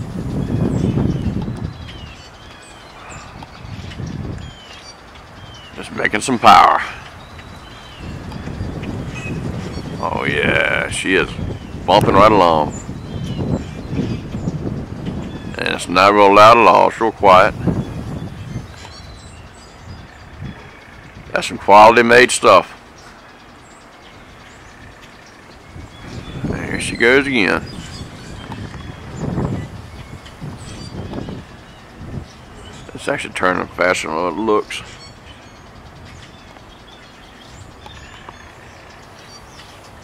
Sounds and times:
Outside, rural or natural: 0.0 - 40.0
Wind: 0.0 - 40.0
Speech: 5.8 - 7.0, 10.0 - 12.8, 15.5 - 17.6, 21.3 - 22.8, 26.5 - 27.7, 32.9 - 34.9.

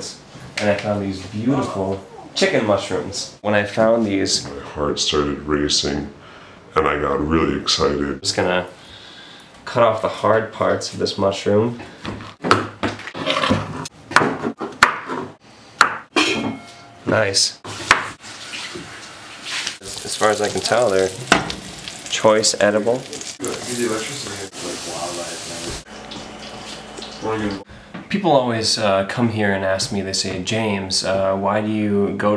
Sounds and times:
Speech: 0.0 - 8.7, 9.6 - 11.8, 17.1 - 17.6, 19.8 - 21.3, 22.1 - 25.8, 27.2 - 32.3.

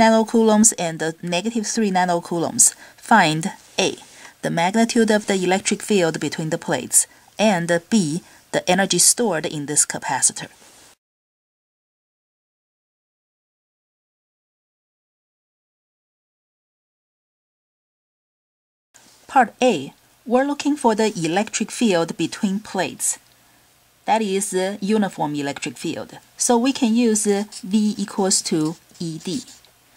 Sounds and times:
Speech: 0.0 - 10.6, 19.3 - 23.2, 24.1 - 29.6.

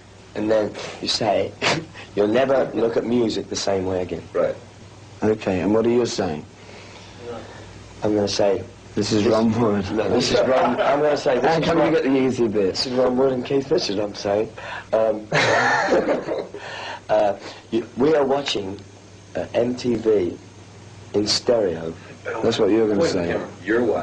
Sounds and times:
Speech: 0.4 - 1.6, 2.2 - 4.6, 5.2 - 6.5, 7.2 - 15.3, 17.1 - 18.8, 19.4 - 20.4, 21.1 - 24.0.

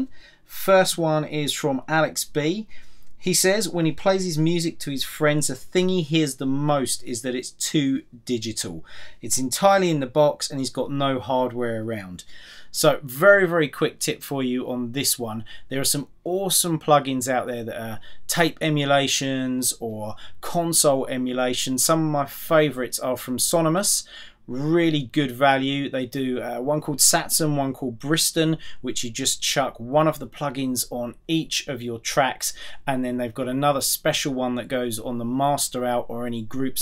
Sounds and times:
Speech: 0.0 - 36.8.

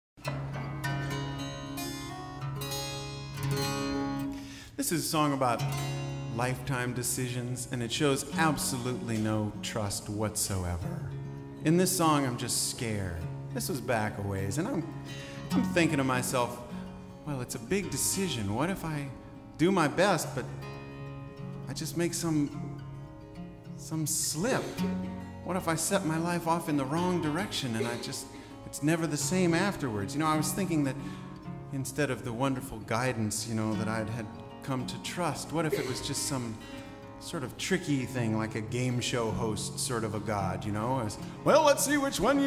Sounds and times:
Music: 0.2 - 42.4
Speech: 4.8 - 5.7, 6.3 - 16.7, 17.3 - 20.5, 21.7 - 22.7, 23.8 - 24.9, 25.5 - 31.1, 31.7 - 42.4.

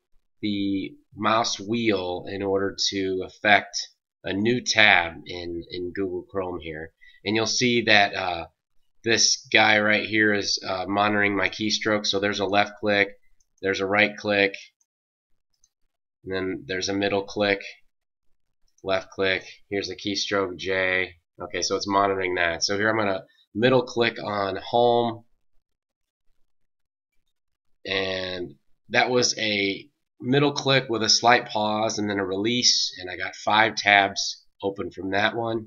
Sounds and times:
Speech: 0.4 - 14.8, 16.3 - 17.9, 18.8 - 25.3, 27.9 - 35.6.

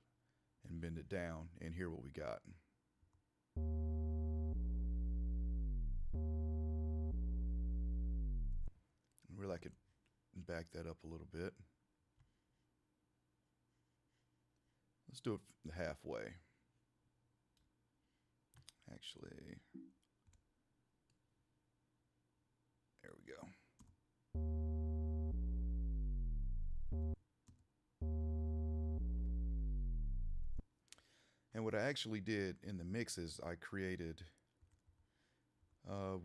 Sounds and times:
Speech: 0.6 - 2.6, 9.2 - 9.8, 10.4 - 11.7, 15.1 - 16.5, 18.7 - 19.7, 23.0 - 23.7, 31.5 - 34.4, 35.8 - 36.2.

